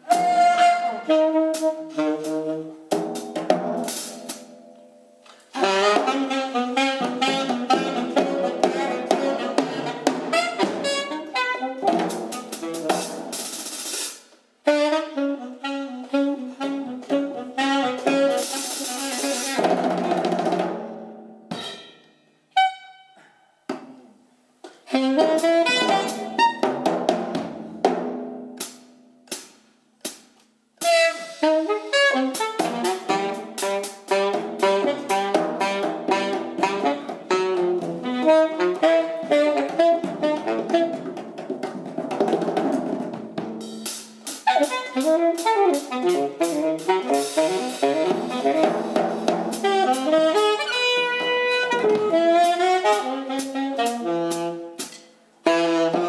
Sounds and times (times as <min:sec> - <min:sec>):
Saxophone: 0:00.0 - 0:02.9, 0:05.3 - 0:13.3, 0:14.6 - 0:20.3, 0:21.5 - 0:24.1, 0:24.7 - 0:26.9, 0:30.8 - 0:41.4, 0:44.4 - 0:56.0
Drum: 0:00.0 - 0:04.6, 0:05.6 - 0:22.0, 0:24.9 - 0:56.0
Drum kit: 0:00.0 - 0:22.8, 0:23.7 - 0:56.0
Jazz: 0:00.0 - 0:56.0.